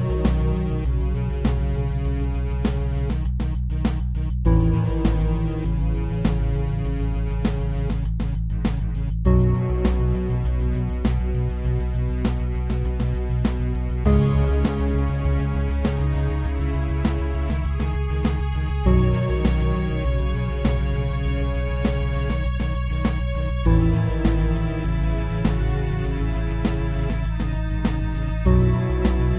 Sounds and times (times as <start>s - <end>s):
Music: 0.0s - 29.3s.